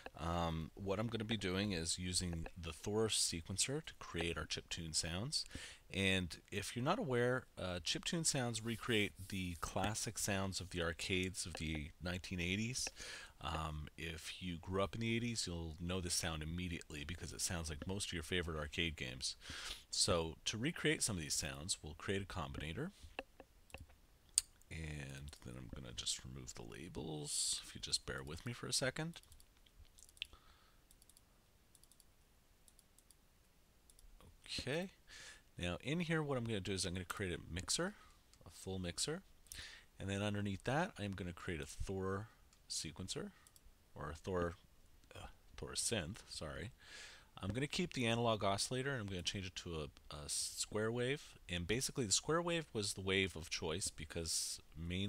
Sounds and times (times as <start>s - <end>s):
Speech: 0.2s - 22.9s, 24.7s - 29.2s, 34.3s - 35.0s, 35.6s - 39.3s, 40.0s - 43.4s, 44.0s - 46.8s, 47.4s - 55.0s.